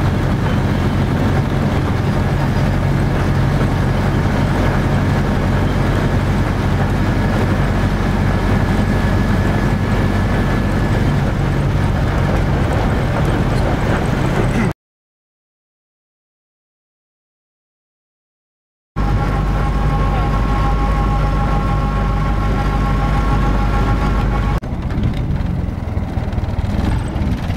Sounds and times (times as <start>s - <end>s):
Truck: 0.0s - 14.8s, 19.0s - 27.5s.